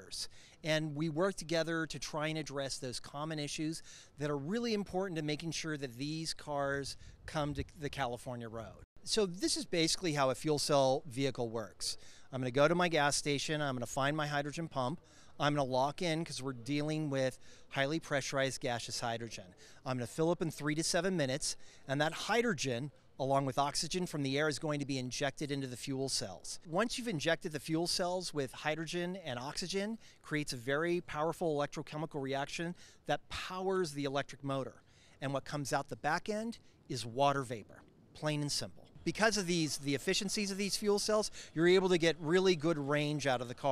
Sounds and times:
Speech: 0.0s - 43.7s.

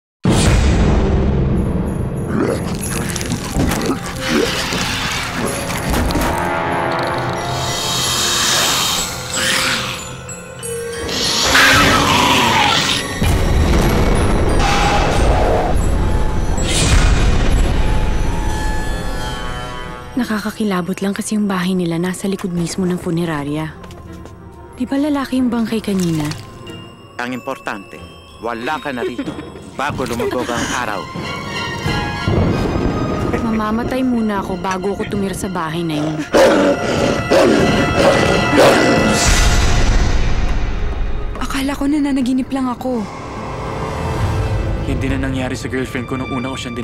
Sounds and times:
Music: 0.2s - 46.8s.

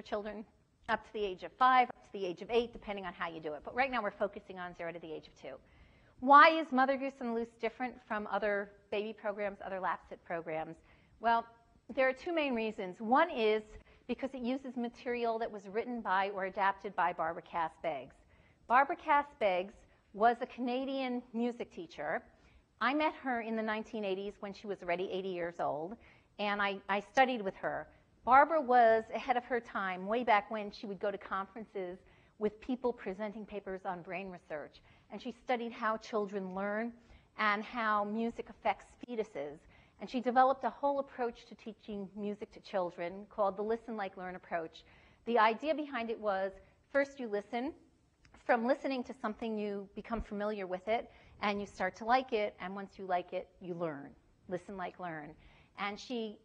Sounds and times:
Speech: 0.0s - 5.6s, 6.2s - 56.4s.

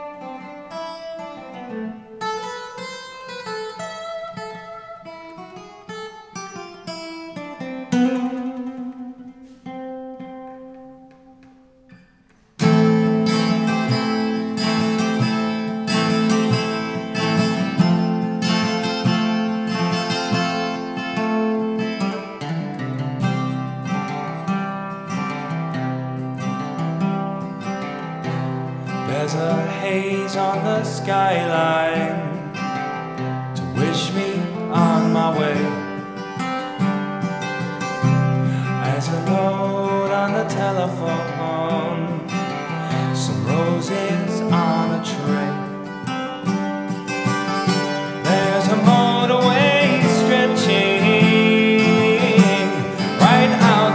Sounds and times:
Music: 0.0s - 53.9s.

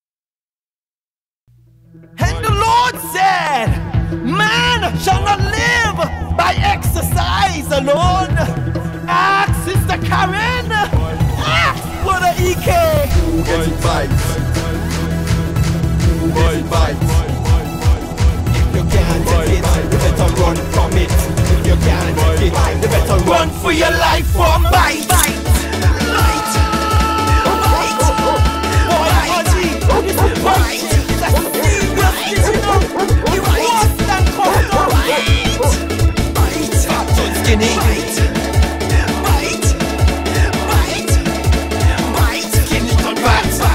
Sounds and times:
Funk: 24.8s - 38.0s.

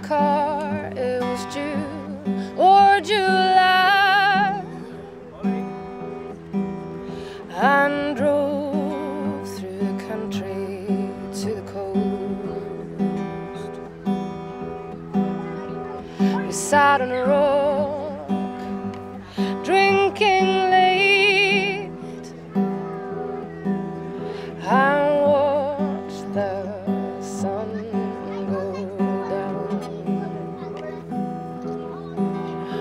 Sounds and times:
Music: 0.0s - 32.8s
Speech: 24.6s - 32.8s.

